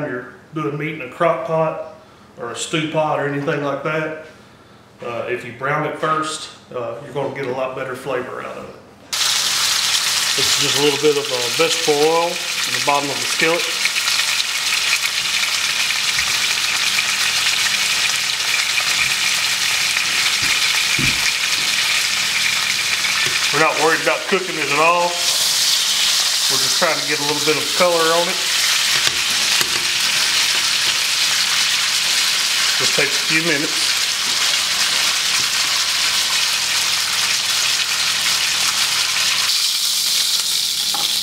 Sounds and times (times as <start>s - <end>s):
Frying (food): 9.1s - 41.2s.